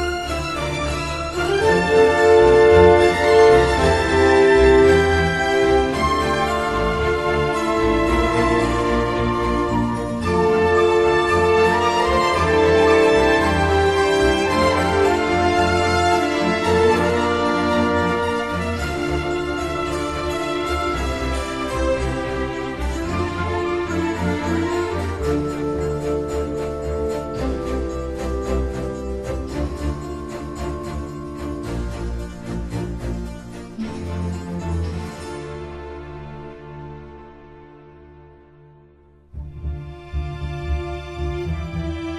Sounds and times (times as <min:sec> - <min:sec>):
Music: 0:00.0 - 0:42.1.